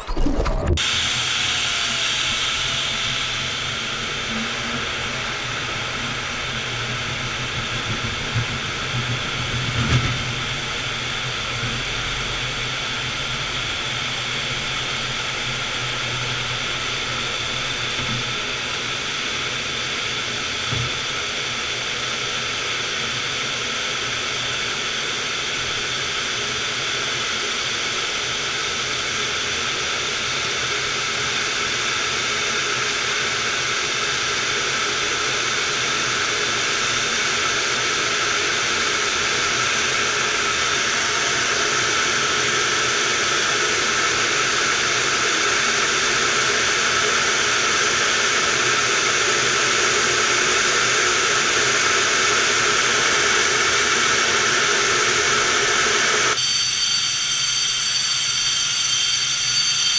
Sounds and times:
Fixed-wing aircraft, airplane: 0.0 - 59.9
Jet engine: 0.0 - 59.9.

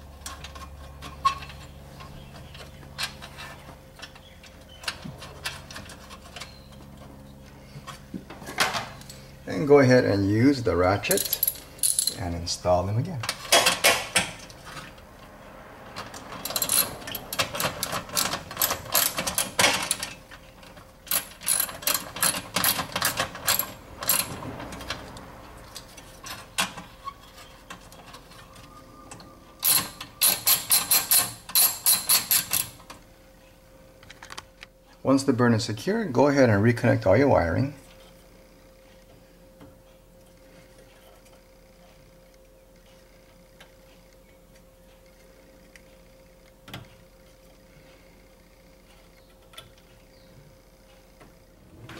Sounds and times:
Speech: 9.5 - 11.2, 12.2 - 13.3, 35.0 - 37.8.

